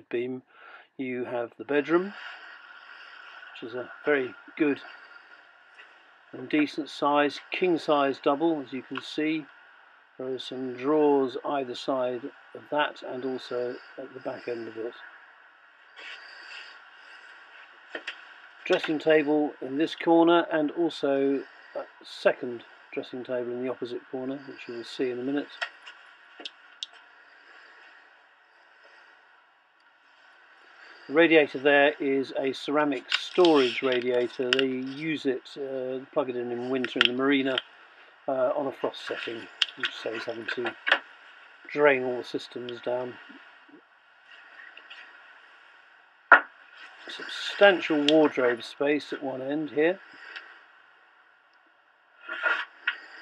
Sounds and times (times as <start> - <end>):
Speech: 0.0 - 2.2, 3.6 - 4.9, 6.4 - 9.5, 10.2 - 15.1, 18.7 - 25.6, 31.1 - 37.6, 38.3 - 40.8, 41.7 - 43.4, 47.1 - 50.0.